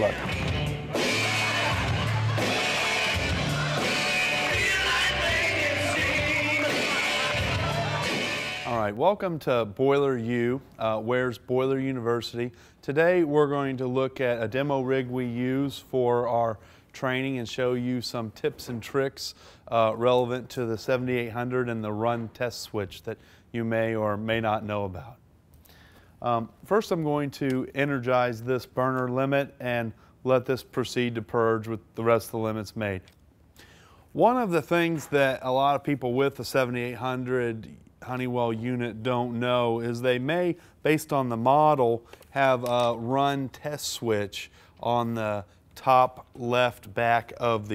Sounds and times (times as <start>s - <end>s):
Speech: 8.7s - 25.2s, 26.2s - 33.1s, 34.2s - 47.7s.